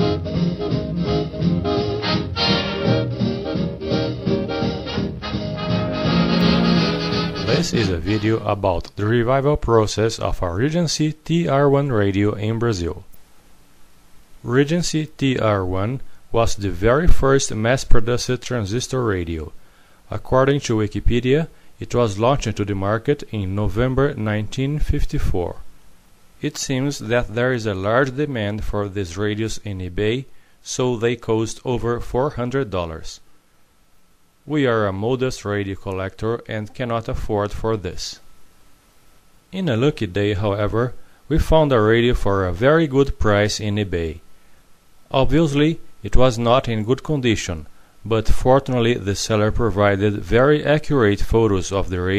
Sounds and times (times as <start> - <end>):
Speech: 7.5 - 13.1, 14.4 - 25.7, 26.4 - 33.2, 34.5 - 38.3, 39.5 - 44.2, 45.1 - 52.1.